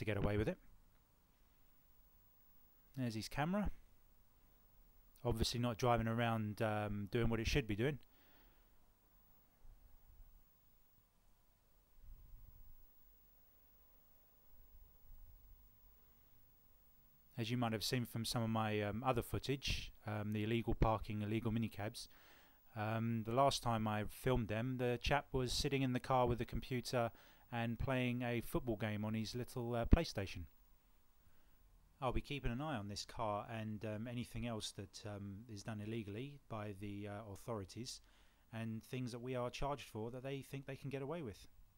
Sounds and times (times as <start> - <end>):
Speech: 0.0 - 0.7, 3.0 - 3.8, 5.2 - 8.0, 17.4 - 22.1, 22.7 - 30.5, 32.0 - 41.5.